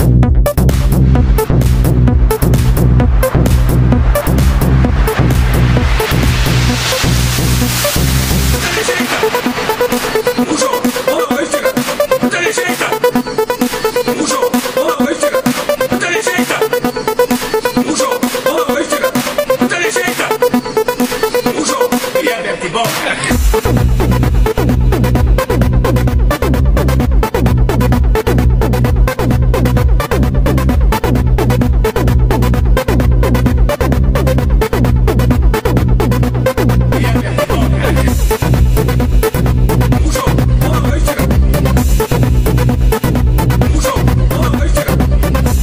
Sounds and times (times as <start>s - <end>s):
Techno: 0.0s - 45.6s.